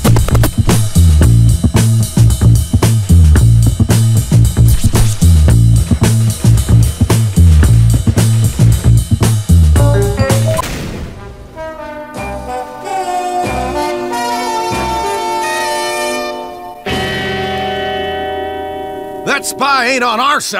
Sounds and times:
Music: 0:00.0 - 0:20.5
Speech: 0:19.2 - 0:20.5.

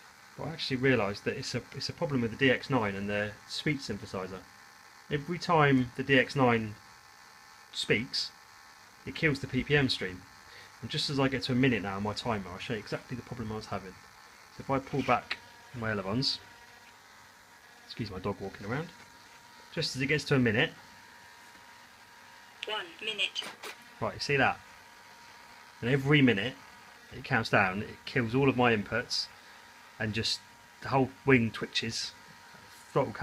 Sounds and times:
Narration, monologue: 0:00.0 - 0:33.2
Male speech, man speaking: 0:00.4 - 0:04.4, 0:05.1 - 0:06.8, 0:07.8 - 0:08.4, 0:09.1 - 0:10.2, 0:10.8 - 0:14.0, 0:14.6 - 0:16.4, 0:17.9 - 0:18.9, 0:19.8 - 0:20.8, 0:24.0 - 0:24.6, 0:25.8 - 0:29.3, 0:30.0 - 0:32.2, 0:32.9 - 0:33.2.

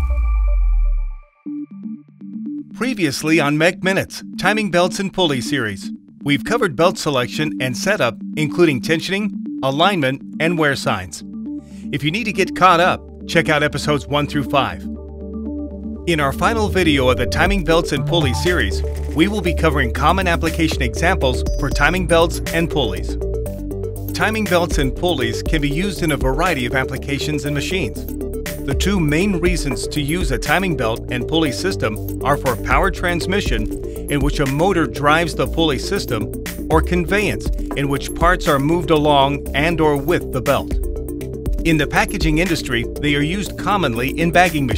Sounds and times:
Music: 0:00.0 - 0:44.7
Speech: 0:02.8 - 0:11.2, 0:11.9 - 0:14.8, 0:16.1 - 0:23.1, 0:24.2 - 0:28.0, 0:28.7 - 0:40.7, 0:41.7 - 0:44.7.

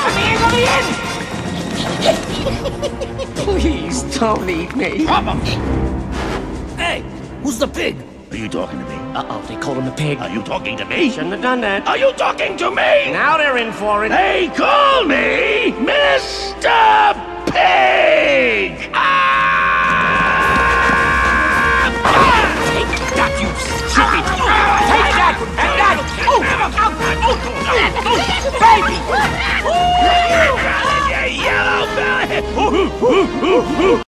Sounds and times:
Music: 0:00.0 - 0:34.0.

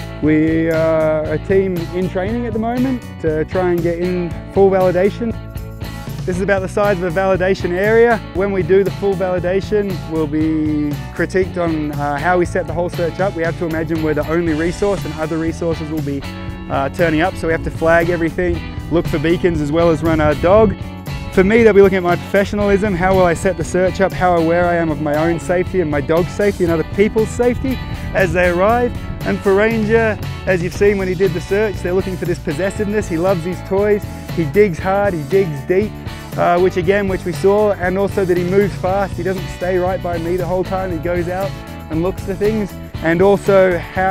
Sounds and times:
Music: 0:00.0 - 0:44.1
Speech: 0:00.2 - 0:05.4, 0:06.3 - 0:20.8, 0:21.4 - 0:44.1.

